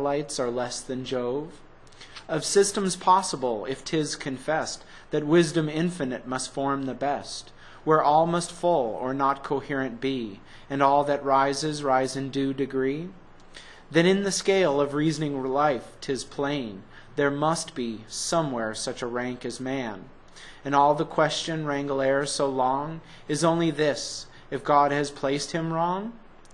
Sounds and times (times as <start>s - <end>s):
Speech: 0.0s - 1.7s, 2.3s - 13.2s, 13.9s - 26.3s.